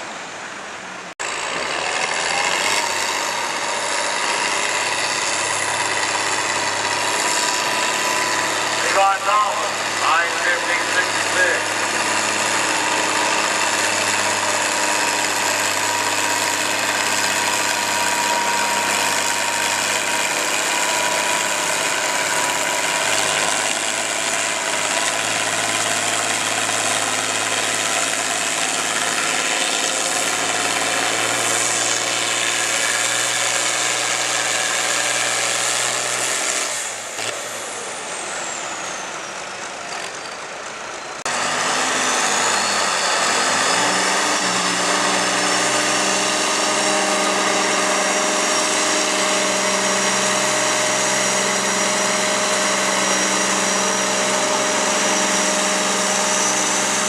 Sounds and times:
Vehicle: 0:00.0 - 0:57.0.

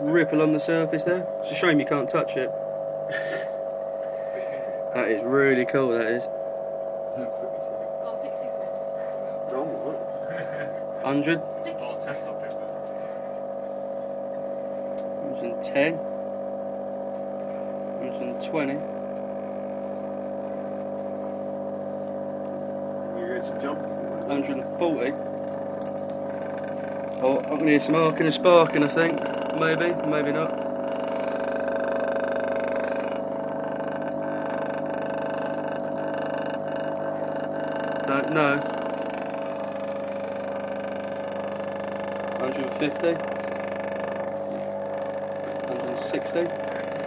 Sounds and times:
Water: 0:00.0 - 0:47.0.

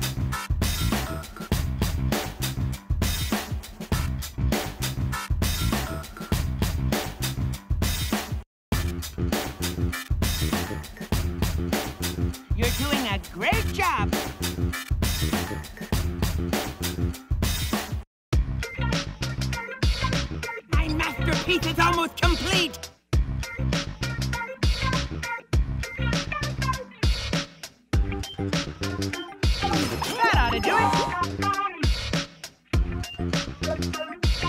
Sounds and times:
Music: 0:00.0 - 0:34.4
Speech: 0:12.6 - 0:14.2, 0:20.7 - 0:22.8, 0:30.0 - 0:31.3.

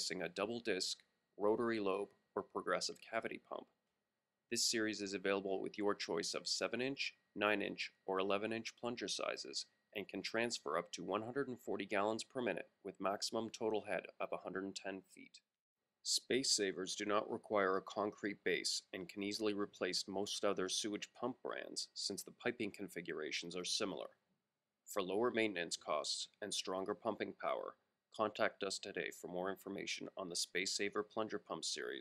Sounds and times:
Speech: 0:00.0 - 0:03.7, 0:04.6 - 0:15.4, 0:16.1 - 0:24.2, 0:24.9 - 0:32.0.

